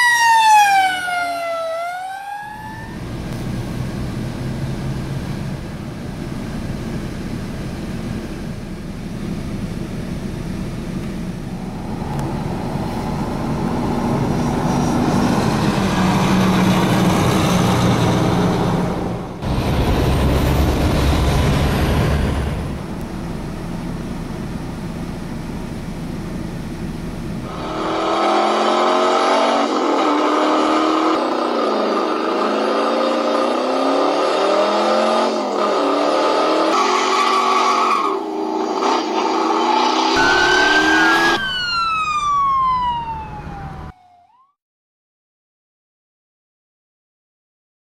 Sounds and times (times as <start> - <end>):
Aircraft: 2.9 - 28.2.